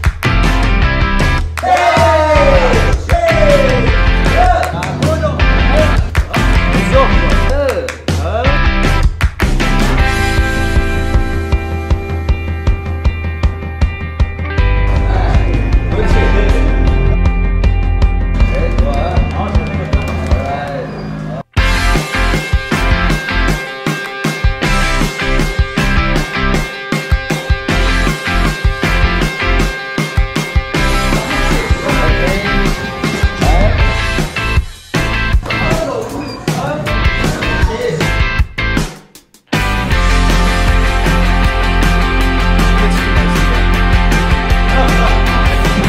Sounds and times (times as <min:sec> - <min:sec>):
Music: 0:00.0 - 0:45.8
Speech: 0:06.8 - 0:08.7, 0:18.5 - 0:21.0, 0:31.5 - 0:32.7, 0:35.5 - 0:38.2.